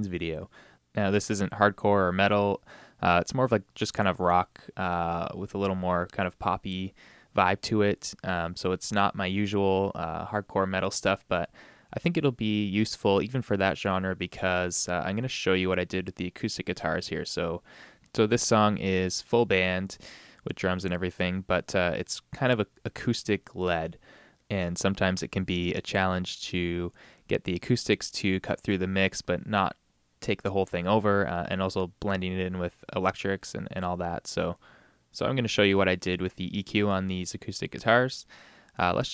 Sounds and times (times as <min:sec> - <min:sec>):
Speech: 0:00.0 - 0:39.1.